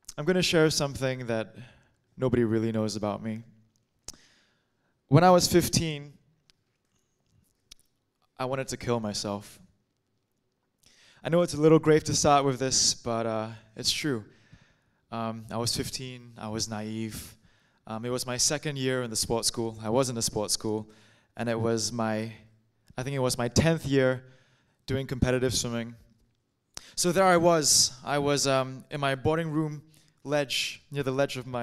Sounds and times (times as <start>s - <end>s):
Speech: 0.1s - 3.6s, 5.1s - 6.2s, 8.4s - 9.6s, 11.2s - 14.3s, 15.1s - 24.2s, 24.9s - 26.1s, 27.0s - 31.6s.